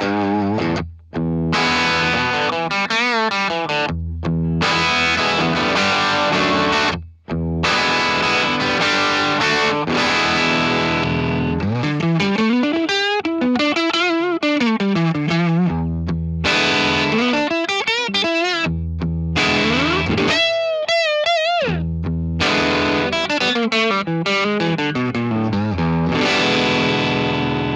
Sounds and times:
Music: 0.0 - 27.7.

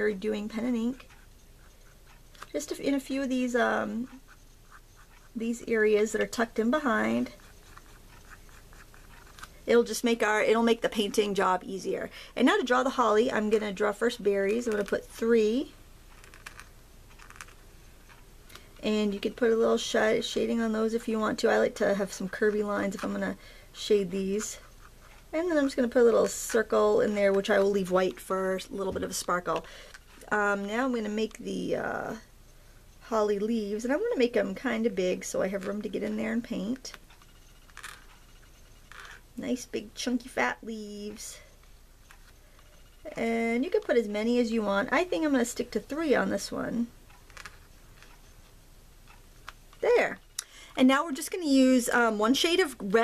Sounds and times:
Speech: 0.0 - 1.1, 2.5 - 4.2, 5.3 - 7.5, 9.6 - 15.8, 18.8 - 24.7, 25.3 - 32.3, 33.0 - 37.0, 39.4 - 41.5, 43.0 - 46.9, 49.8 - 50.2, 50.8 - 53.0
Writing: 0.0 - 11.6, 12.6 - 31.2, 41.1 - 44.4
Inside, small room: 0.0 - 53.0.

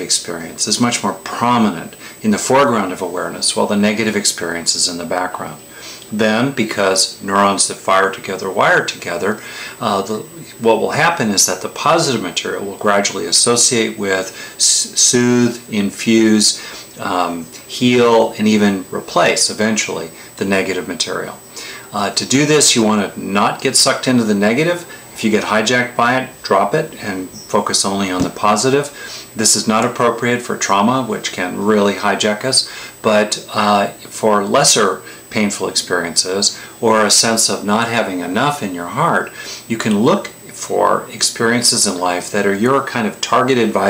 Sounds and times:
Speech: 0.0 - 43.9.

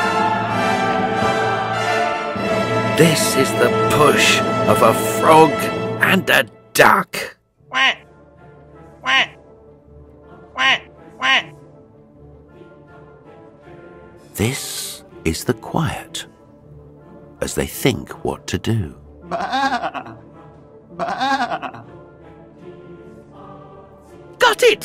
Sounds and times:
Music: 0.0 - 24.8
Speech: 3.0 - 8.0, 14.4 - 16.3, 17.4 - 19.0, 24.4 - 24.8.

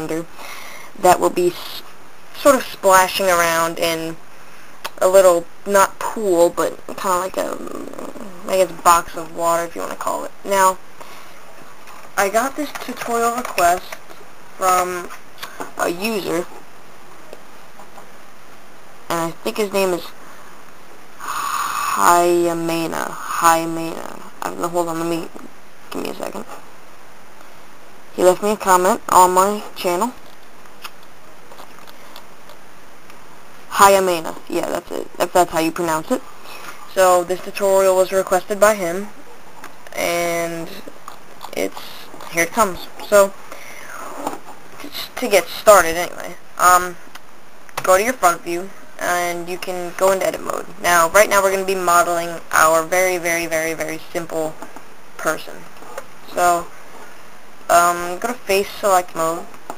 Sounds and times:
Speech: 0.0 - 0.3, 1.0 - 4.2, 5.0 - 10.8, 12.2 - 14.0, 14.6 - 15.1, 15.8 - 16.5, 19.1 - 20.2, 22.0 - 26.5, 28.2 - 30.2, 33.7 - 36.2, 36.9 - 39.1, 39.9 - 40.9, 41.5 - 43.4, 44.0 - 47.0, 47.8 - 54.6, 55.2 - 55.7, 56.3 - 56.7, 57.7 - 59.5.

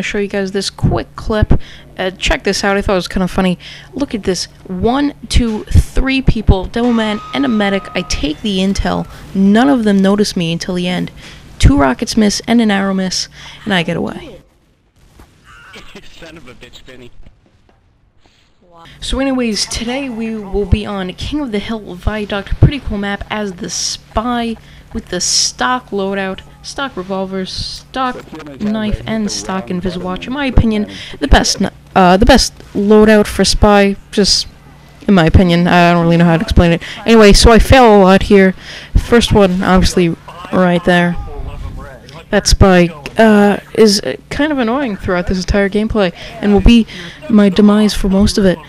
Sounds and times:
Speech: 0.0 - 14.4, 15.8 - 17.1, 18.7 - 34.5, 35.1 - 48.6.

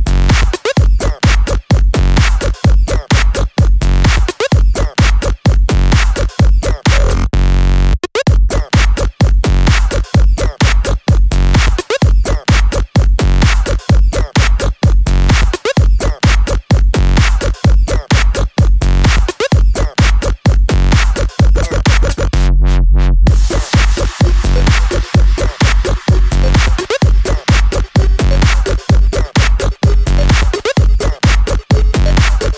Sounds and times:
Electronic dance music: 0.0 - 22.6, 23.3 - 32.5.

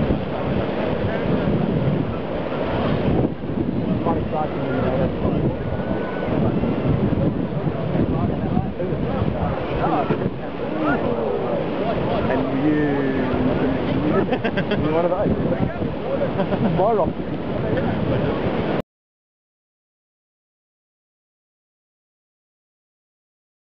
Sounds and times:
Boat, Water vehicle: 0.0 - 18.8
Speech: 4.0 - 18.4.

